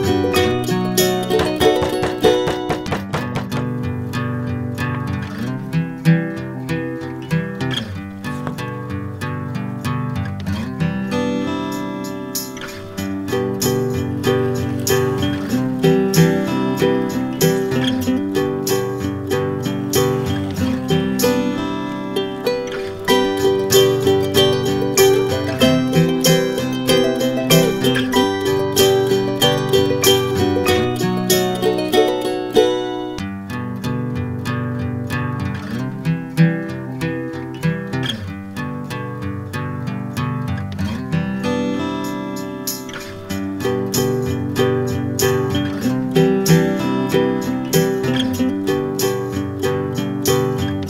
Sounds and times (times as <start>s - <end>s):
Music: 0.0s - 50.8s.